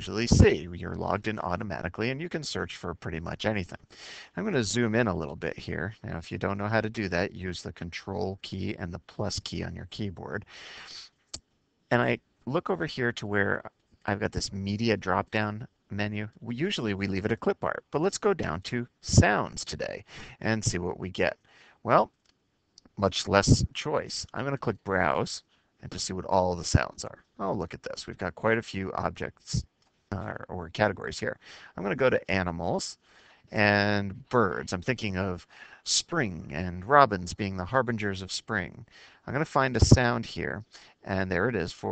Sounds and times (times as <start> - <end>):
Speech: 0.0 - 11.1, 11.9 - 22.1, 23.0 - 41.9.